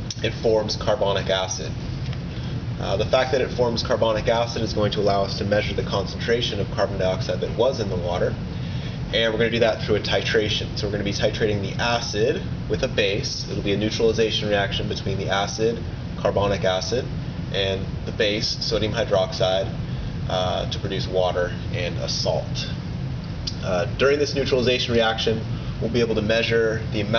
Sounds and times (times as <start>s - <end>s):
Speech: 0.1s - 1.8s, 2.8s - 8.4s, 9.1s - 22.8s, 23.5s - 27.1s.